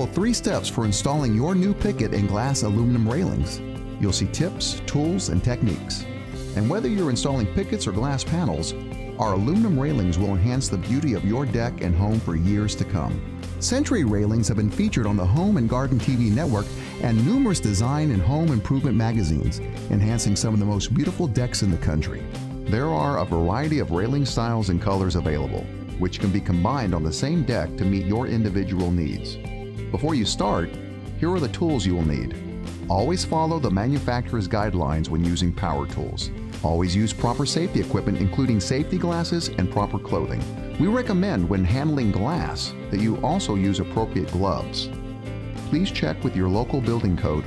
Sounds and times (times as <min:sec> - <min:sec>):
Speech: 0:00.0 - 0:44.9, 0:45.7 - 0:47.4
Music: 0:00.0 - 0:47.4.